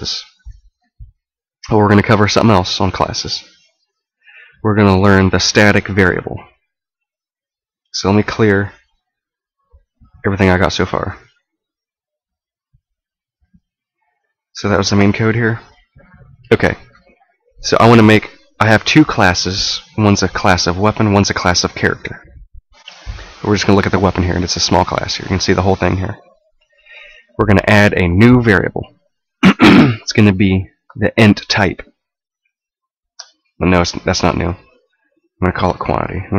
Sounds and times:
Speech: 0.0 - 0.6, 1.6 - 3.6, 4.6 - 6.6, 7.9 - 8.9, 10.1 - 11.4, 14.6 - 22.4, 23.4 - 26.4, 27.4 - 29.0, 30.0 - 32.0, 33.6 - 34.8, 35.4 - 36.3.

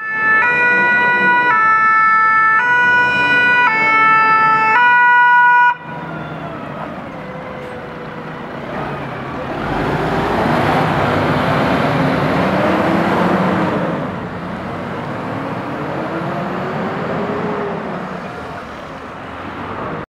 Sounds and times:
Motor vehicle (road): 0.0 - 20.0.

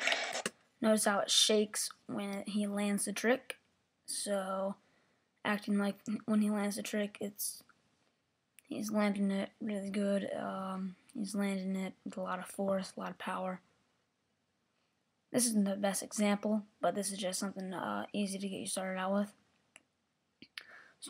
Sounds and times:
Speech: 0.8 - 4.8, 5.5 - 7.6, 8.7 - 13.6, 15.4 - 19.4.

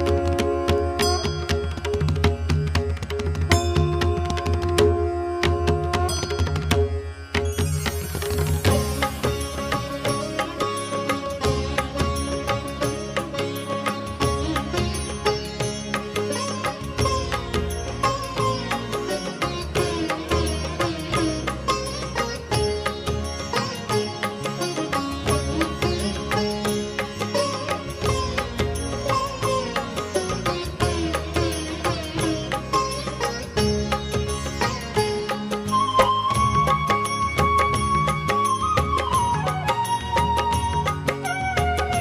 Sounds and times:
Music: 0.0 - 42.0.

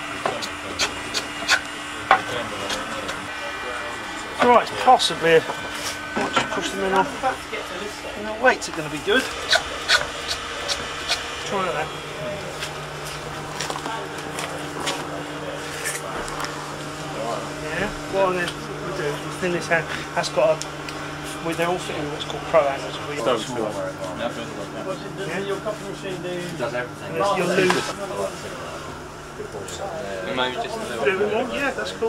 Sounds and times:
Filing (rasp): 0.3 - 1.7, 9.4 - 11.2.

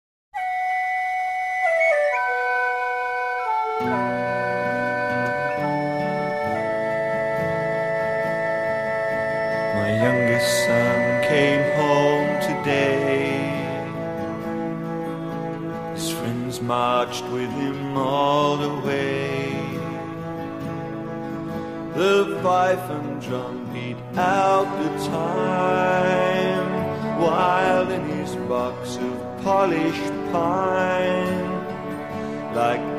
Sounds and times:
Music: 0.4 - 32.9.

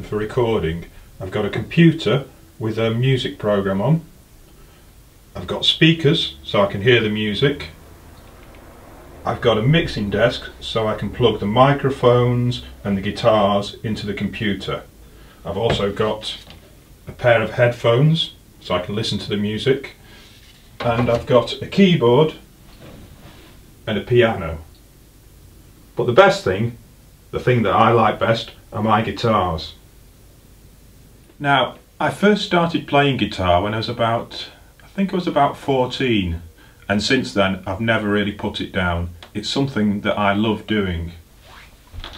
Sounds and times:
Speech: 0.0 - 4.1, 5.4 - 7.8, 9.2 - 20.0, 20.8 - 22.4, 23.9 - 24.7, 26.0 - 29.8, 31.4 - 41.2.

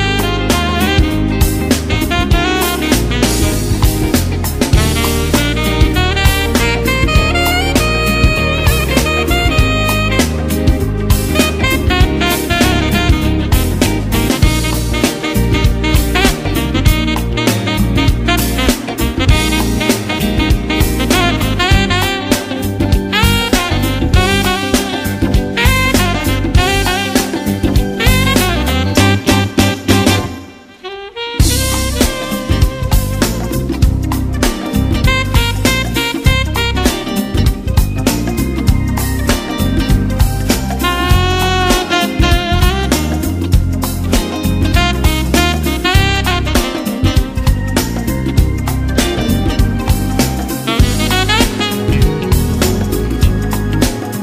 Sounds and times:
Swing music: 0.0 - 54.2.

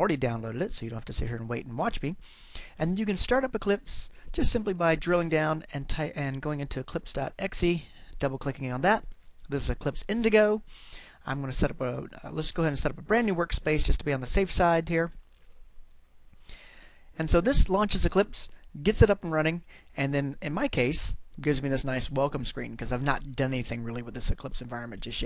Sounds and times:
Speech: 0.0 - 2.2, 2.8 - 15.2, 17.2 - 25.2.

